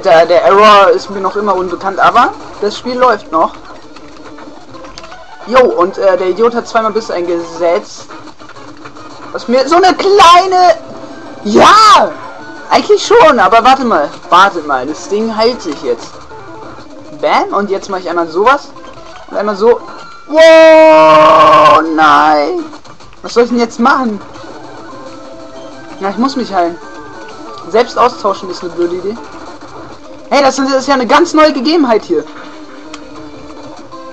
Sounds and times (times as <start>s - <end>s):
Speech: 0.0s - 3.5s, 5.5s - 8.1s, 9.4s - 10.8s, 11.5s - 16.1s, 17.2s - 18.7s, 19.3s - 24.2s, 26.0s - 26.8s, 27.6s - 29.2s, 30.3s - 32.3s
Music: 0.0s - 21.7s, 23.6s - 34.1s.